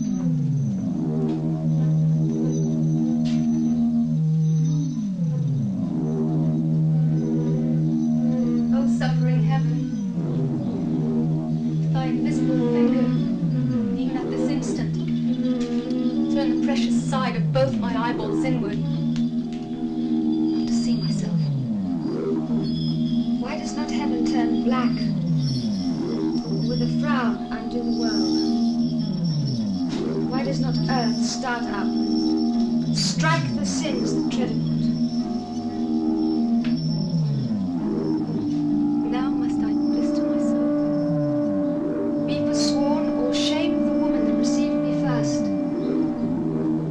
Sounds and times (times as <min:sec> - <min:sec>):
Music: 0:00.0 - 0:46.9
Speech: 0:08.7 - 0:09.9, 0:11.9 - 0:13.3, 0:14.0 - 0:15.0, 0:16.3 - 0:19.0, 0:20.7 - 0:21.5, 0:23.4 - 0:25.1, 0:26.7 - 0:28.4, 0:30.3 - 0:31.9, 0:33.0 - 0:34.6, 0:39.1 - 0:40.6, 0:42.3 - 0:45.5.